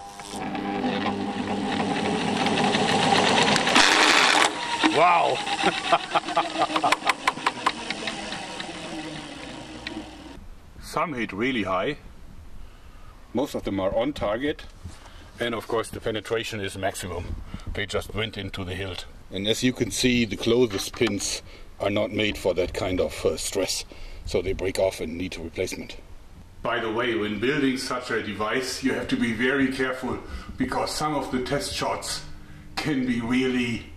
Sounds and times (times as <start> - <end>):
Speech: 4.9 - 5.4, 10.8 - 12.0, 13.3 - 14.7, 15.4 - 26.0, 26.6 - 33.9.